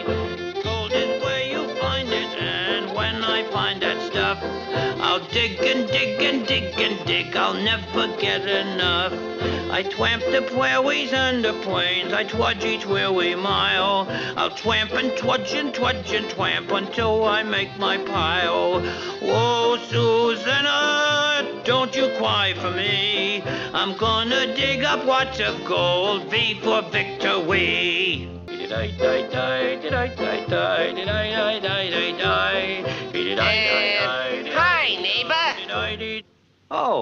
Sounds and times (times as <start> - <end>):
Music: 0.0 - 36.2
Male singing: 0.6 - 36.2.